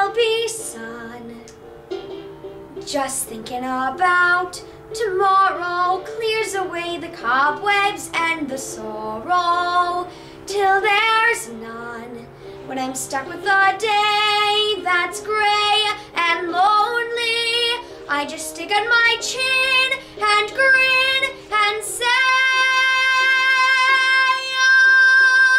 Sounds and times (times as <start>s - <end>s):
Music: 0.0s - 25.5s
Child singing: 2.9s - 25.5s
Female singing: 2.9s - 25.5s.